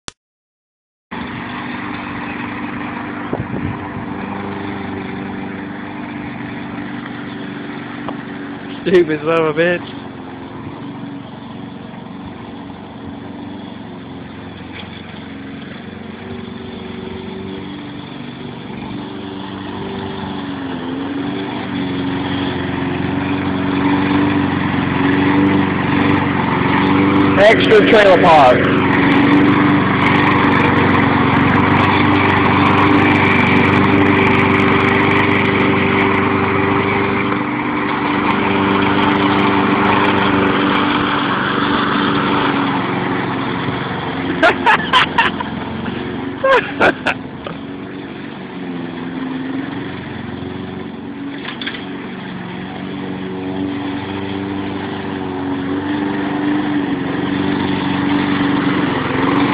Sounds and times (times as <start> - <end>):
Lawn mower: 1.1 - 59.5
Outside, urban or manmade: 1.1 - 59.5
Vehicle: 1.1 - 59.5
Speech: 8.8 - 9.9, 27.4 - 28.6.